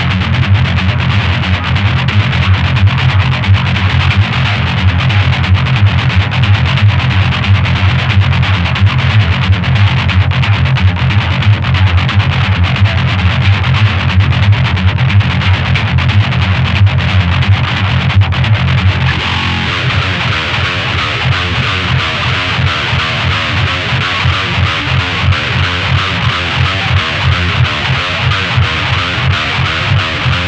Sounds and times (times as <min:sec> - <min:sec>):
Electric guitar: 0:00.0 - 0:30.4.